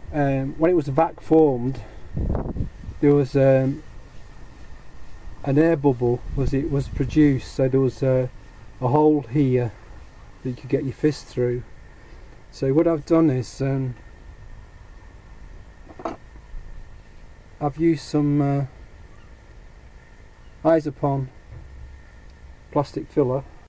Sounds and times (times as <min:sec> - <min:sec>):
Speech: 0:00.1 - 0:01.9, 0:03.0 - 0:03.8, 0:05.4 - 0:09.8, 0:10.4 - 0:11.7, 0:12.5 - 0:14.0, 0:17.6 - 0:18.8, 0:20.6 - 0:21.3, 0:22.7 - 0:23.5.